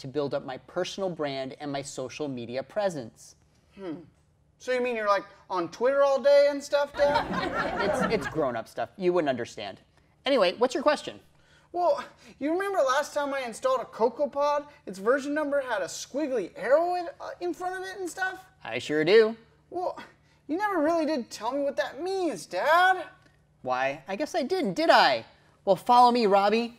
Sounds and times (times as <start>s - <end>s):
Speech: 0.0s - 26.7s.